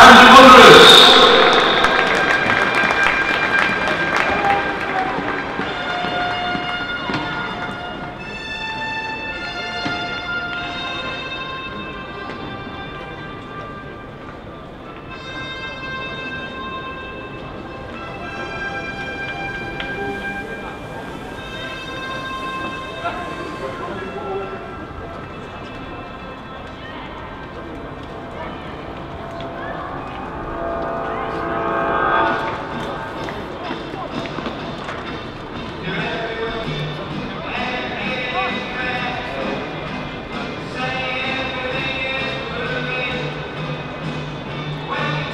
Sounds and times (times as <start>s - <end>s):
Music: 0.0s - 45.3s.